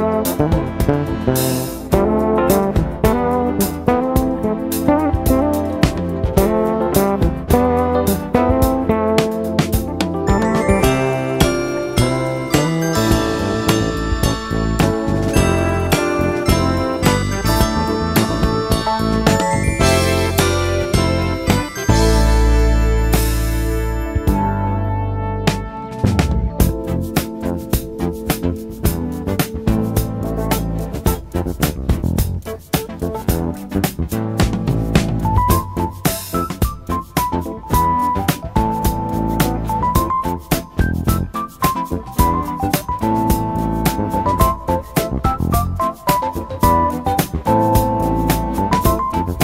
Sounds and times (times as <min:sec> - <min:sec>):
Music: 0:00.0 - 0:49.4.